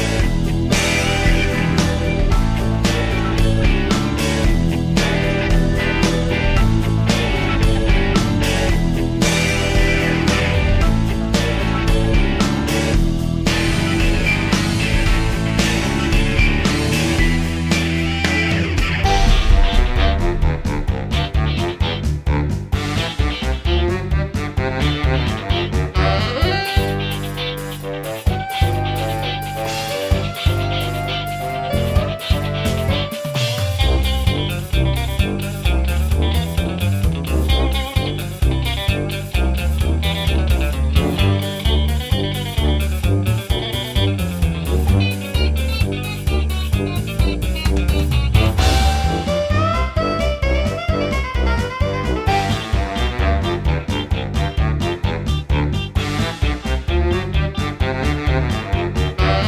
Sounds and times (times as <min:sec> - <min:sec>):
Soundtrack music: 0:00.0 - 0:59.4.